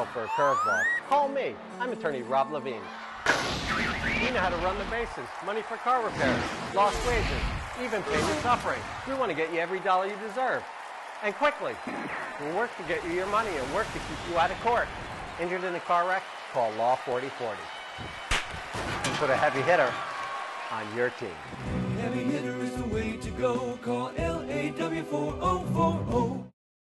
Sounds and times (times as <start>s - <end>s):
Music: 0.0s - 5.0s, 21.5s - 26.5s
Speech: 4.2s - 10.6s, 11.2s - 11.8s, 12.4s - 17.7s, 19.2s - 20.0s, 20.7s - 21.4s.